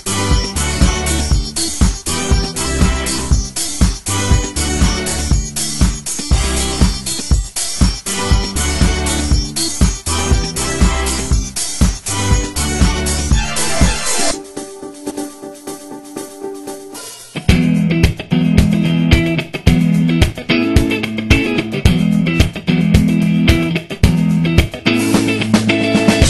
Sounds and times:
Music: 0.0s - 26.2s.

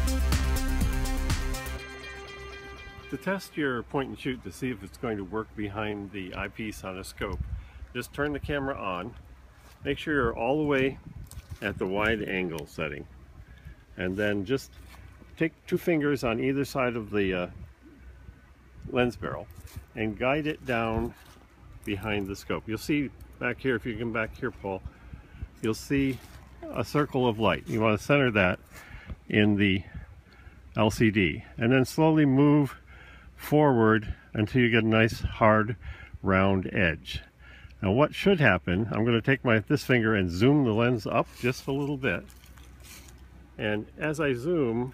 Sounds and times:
Speech: 3.1s - 7.4s, 8.0s - 9.2s, 9.8s - 11.0s, 11.6s - 13.1s, 14.0s - 14.7s, 15.4s - 17.6s, 18.8s - 21.2s, 21.9s - 24.9s, 25.6s - 28.6s, 29.3s - 30.0s, 30.8s - 32.8s, 33.4s - 42.3s, 43.6s - 44.9s.

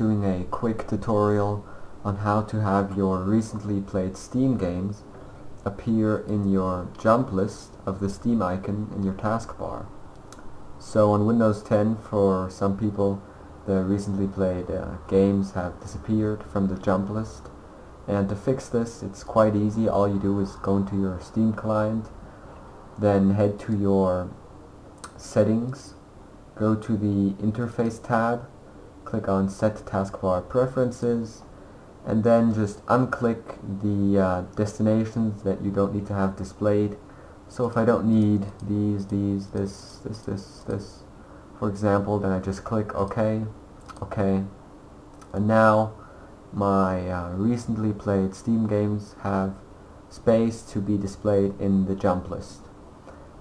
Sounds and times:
Speech: 0.0s - 10.0s, 10.8s - 17.5s, 18.1s - 22.2s, 23.0s - 24.4s, 25.0s - 26.0s, 26.6s - 44.6s, 45.2s - 52.7s.

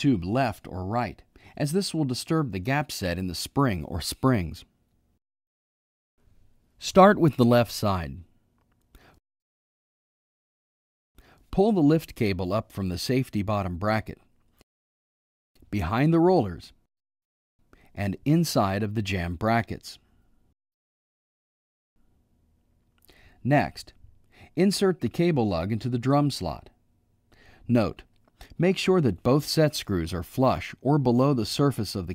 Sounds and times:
Speech: 0.0s - 4.7s, 6.8s - 8.3s, 11.5s - 14.3s, 15.6s - 16.8s, 18.0s - 20.0s, 23.4s - 24.0s, 24.6s - 26.8s, 27.7s - 32.1s.

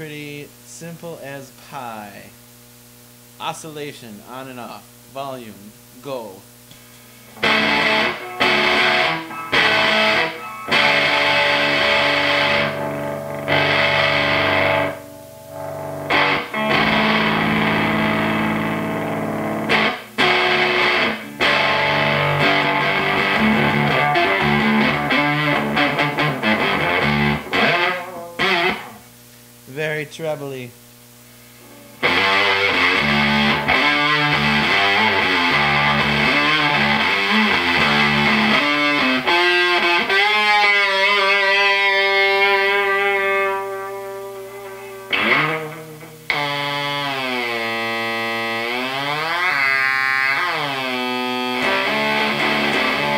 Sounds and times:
Distortion: 0.0s - 53.1s
Electric guitar: 6.7s - 29.6s, 31.3s - 53.1s.

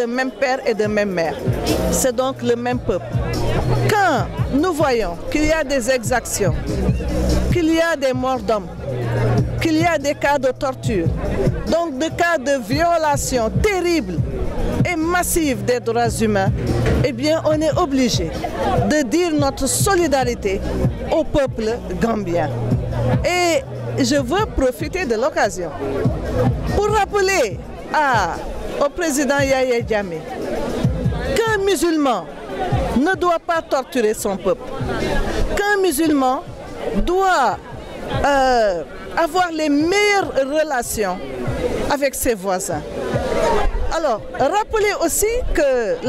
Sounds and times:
Speech: 0.0s - 6.7s, 7.5s - 26.0s, 26.7s - 30.4s, 31.1s - 42.8s, 43.4s - 46.0s
Music: 0.0s - 46.0s.

